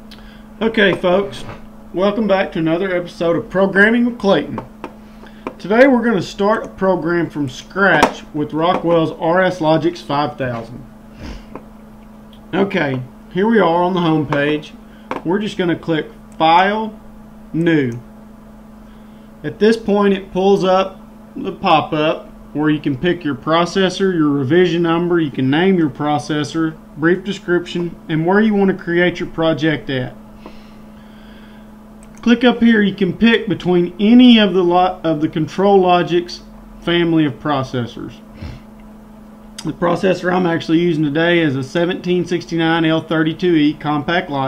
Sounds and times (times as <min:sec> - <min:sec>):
Speech: 0:00.6 - 0:04.7, 0:05.6 - 0:10.8, 0:12.5 - 0:17.0, 0:17.6 - 0:18.0, 0:19.4 - 0:30.2, 0:32.2 - 0:38.2, 0:39.6 - 0:44.4.